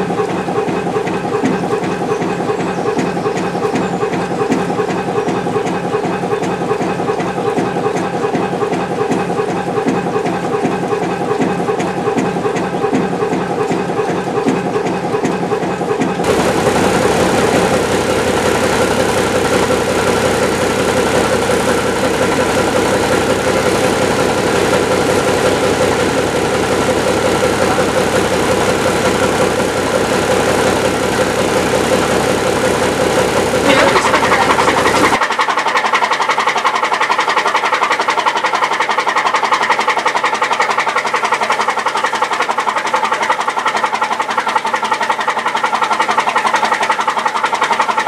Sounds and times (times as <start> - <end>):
Boat, Water vehicle: 0.0 - 48.0
Engine: 0.0 - 48.0.